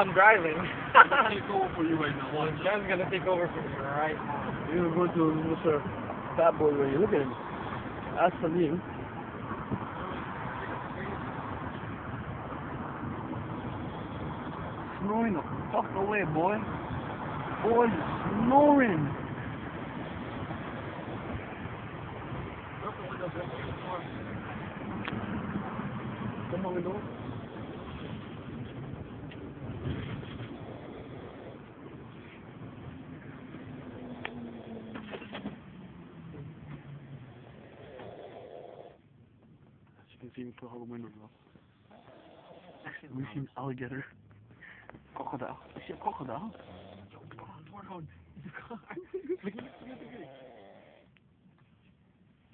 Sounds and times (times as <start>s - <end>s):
Outside, urban or manmade: 0.0s - 52.5s
Vehicle: 0.0s - 52.5s.